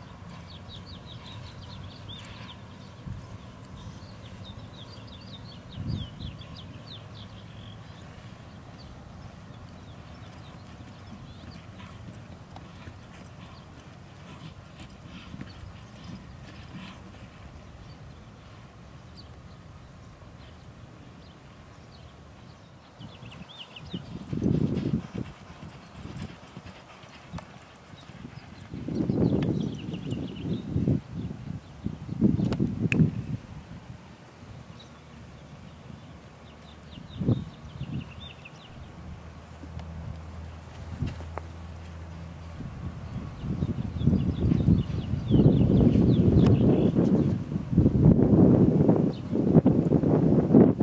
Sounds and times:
Horse: 0.0s - 33.1s, 34.8s - 47.7s
Wind: 0.0s - 50.8s.

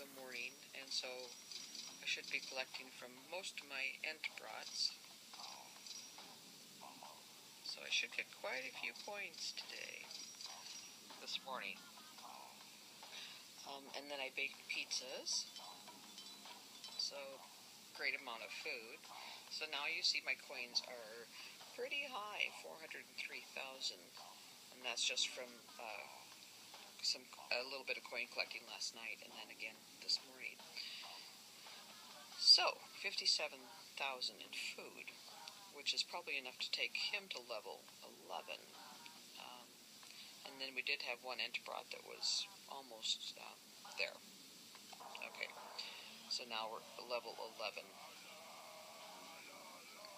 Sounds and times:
Speech: 0.0s - 1.3s, 2.0s - 5.0s, 7.7s - 10.1s, 11.2s - 11.8s, 13.2s - 15.5s, 17.0s - 24.2s, 24.8s - 26.2s, 27.0s - 30.9s, 32.4s - 35.2s, 35.8s - 39.7s, 40.4s - 44.2s, 45.1s - 48.2s.

